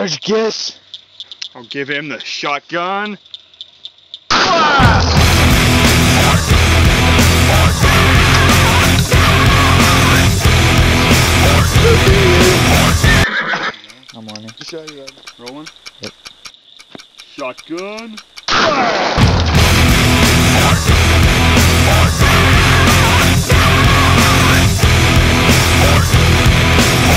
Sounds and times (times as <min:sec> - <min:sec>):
Speech: 0:00.0 - 0:00.8, 0:01.6 - 0:03.2, 0:11.8 - 0:12.7, 0:14.2 - 0:15.7, 0:17.3 - 0:18.2
Outside, rural or natural: 0:00.0 - 0:07.3, 0:08.4 - 0:20.9
Music: 0:04.8 - 0:13.3, 0:19.2 - 0:27.1.